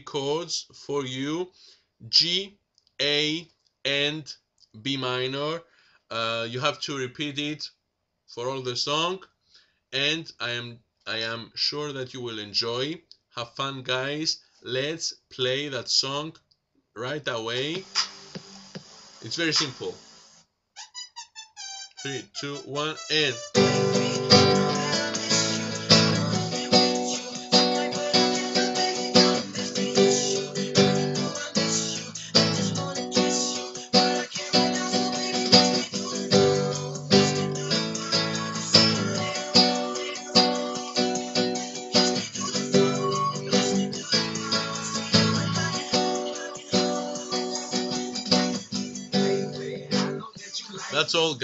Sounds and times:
Speech: 0:00.0 - 0:09.3, 0:10.0 - 0:16.4, 0:17.0 - 0:17.9, 0:19.2 - 0:20.0, 0:22.0 - 0:23.4, 0:50.4 - 0:51.4
Acoustic guitar: 0:22.0 - 0:51.2
Strum: 0:23.4 - 0:46.2.

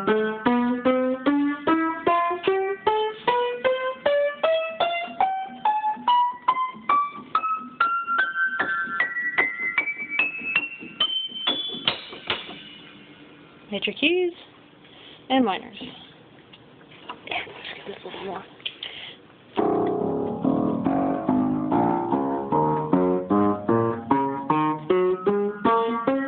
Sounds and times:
Music: 0:00.0 - 0:13.3, 0:19.6 - 0:26.2
Speech: 0:13.7 - 0:14.5, 0:15.3 - 0:16.1, 0:17.3 - 0:18.6.

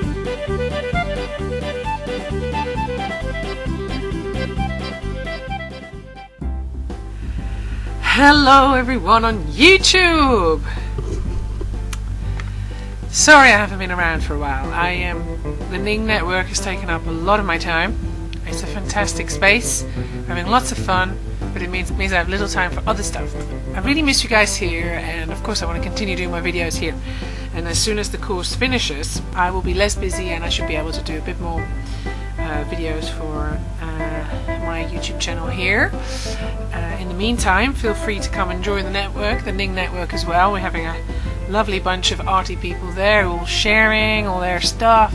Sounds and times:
Music: 0:00.0 - 0:45.1
Speech: 0:08.1 - 0:10.7, 0:13.1 - 0:27.0, 0:27.6 - 0:31.7, 0:32.4 - 0:36.0, 0:36.8 - 0:45.1.

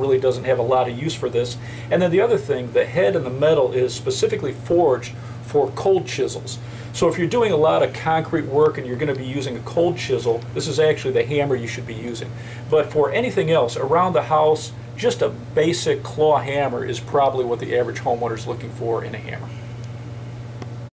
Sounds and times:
Speech: 0:00.0 - 0:19.5.

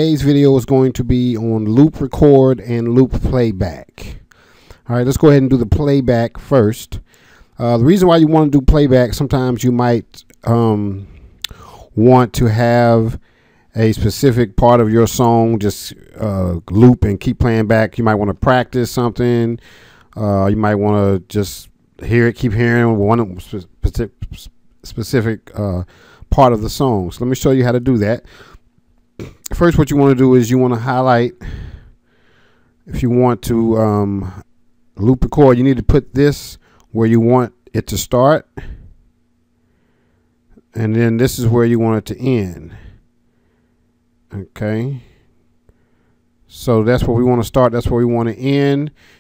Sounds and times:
Speech: 0:00.0 - 0:11.1, 0:11.7 - 0:19.6, 0:20.2 - 0:28.3, 0:29.2 - 0:31.5, 0:32.9 - 0:38.8, 0:40.6 - 0:42.9, 0:44.3 - 0:45.2, 0:46.5 - 0:49.0.

